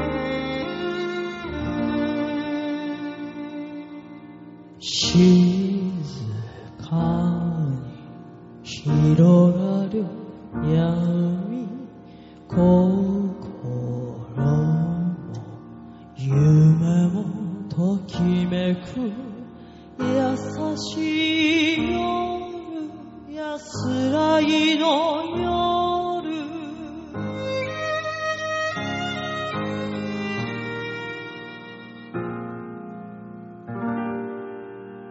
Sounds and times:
Music: 0.0s - 35.1s.

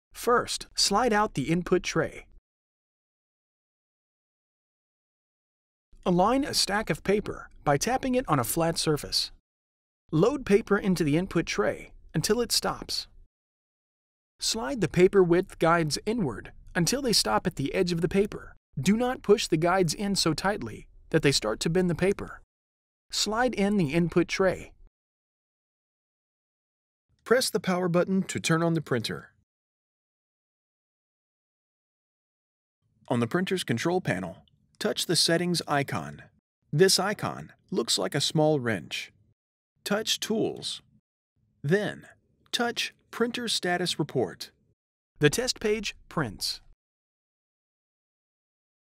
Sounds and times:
Speech: 0.2s - 2.3s, 6.0s - 9.4s, 10.1s - 13.1s, 14.4s - 22.4s, 23.1s - 24.8s, 27.3s - 29.4s, 33.1s - 39.2s, 39.9s - 40.9s, 41.7s - 44.6s, 45.2s - 46.8s.

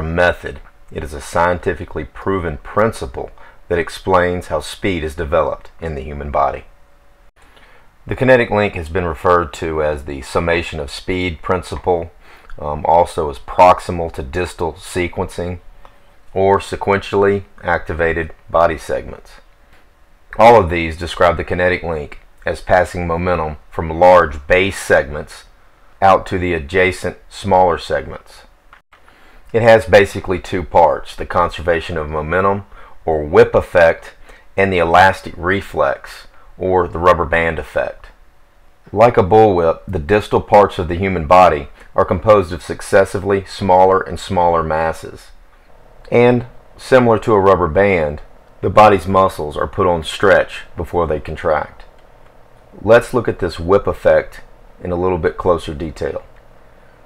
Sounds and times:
Speech: 0.0s - 6.7s, 8.1s - 15.6s, 16.3s - 19.5s, 20.4s - 28.5s, 29.5s - 38.2s, 38.9s - 45.4s, 46.1s - 51.9s, 52.7s - 56.3s.

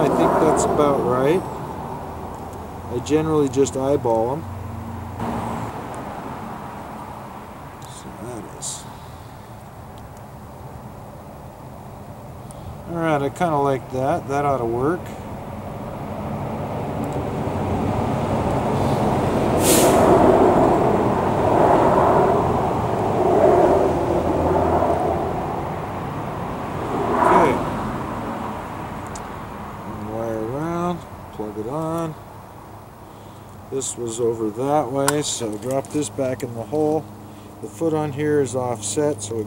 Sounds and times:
Speech: 0.0s - 1.4s, 2.9s - 4.4s, 7.9s - 8.9s, 12.9s - 15.2s, 27.3s - 27.6s, 29.9s - 32.2s, 33.7s - 39.4s
Outside, rural or natural: 0.0s - 39.4s
Vehicle: 0.0s - 39.4s.

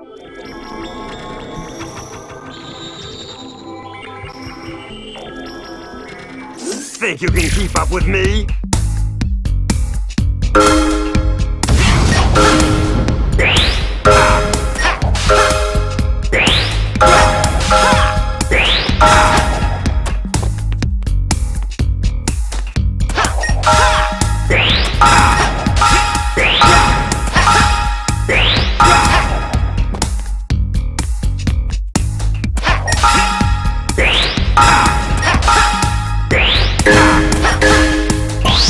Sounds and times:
Music: 0.0s - 38.7s.

